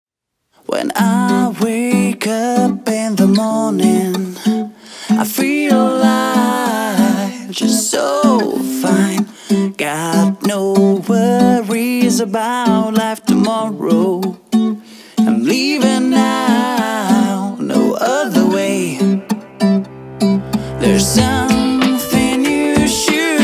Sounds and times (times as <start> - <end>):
Music: 1.3 - 23.4.